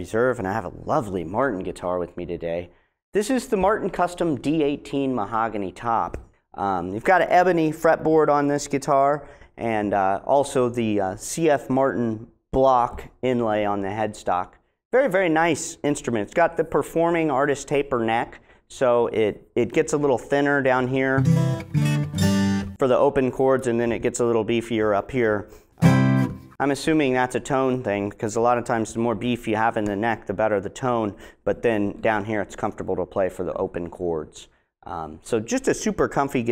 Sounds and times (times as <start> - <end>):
Speech: 0.0 - 21.2, 22.8 - 25.5, 26.6 - 36.5
Acoustic guitar: 21.2 - 22.8, 25.5 - 26.6.